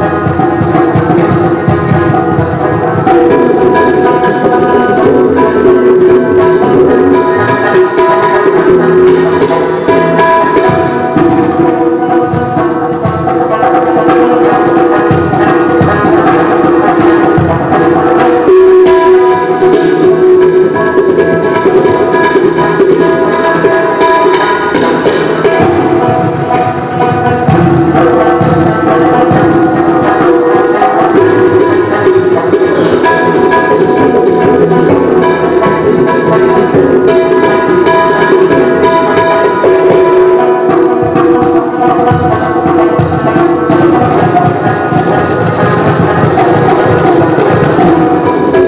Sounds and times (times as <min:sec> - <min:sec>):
Tabla: 0:00.0 - 0:48.6.